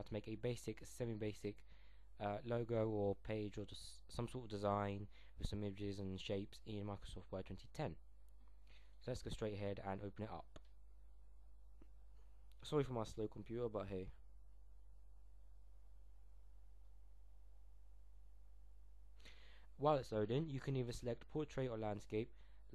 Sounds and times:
Speech: 0:00.0 - 0:01.6, 0:02.2 - 0:08.0, 0:09.0 - 0:10.6, 0:12.6 - 0:14.2, 0:19.8 - 0:22.7.

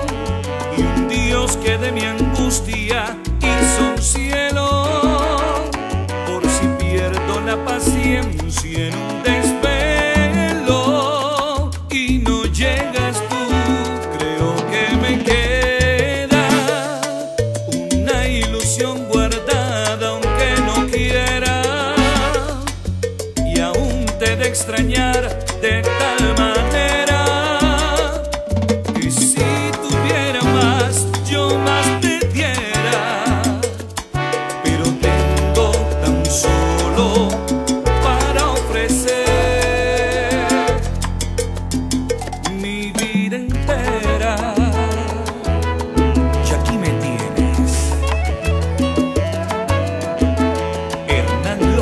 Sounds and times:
Salsa music: 0:00.0 - 0:51.8.

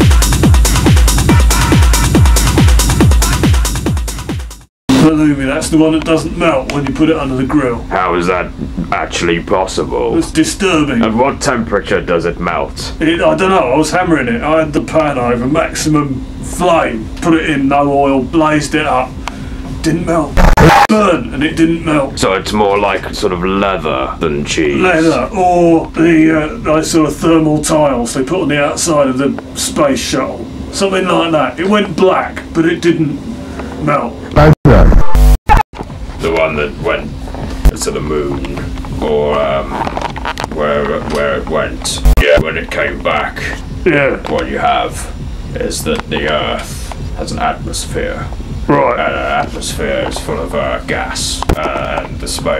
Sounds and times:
Speech: 0:04.9 - 0:19.2, 0:19.8 - 0:34.9, 0:36.2 - 0:52.5.

